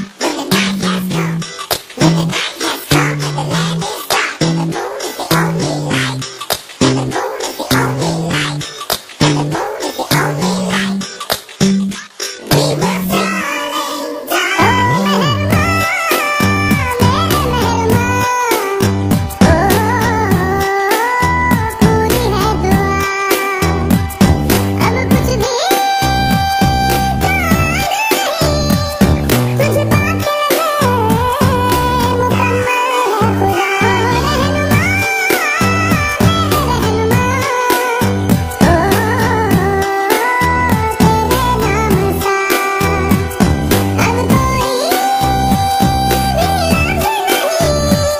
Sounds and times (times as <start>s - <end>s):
Music: 0.0s - 48.1s.